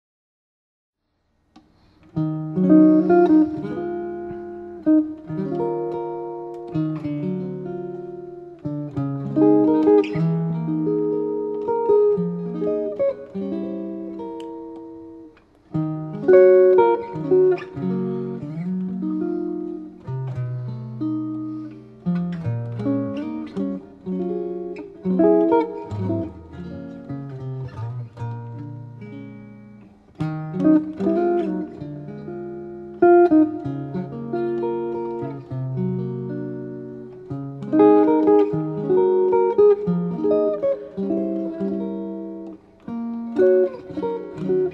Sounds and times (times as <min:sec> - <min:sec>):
Guitar: 0:01.1 - 0:44.7.